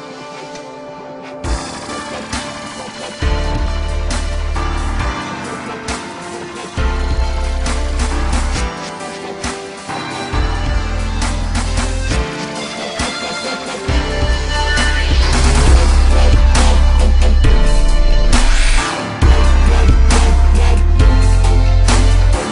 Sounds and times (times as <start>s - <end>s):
Dubstep: 0.0s - 22.5s.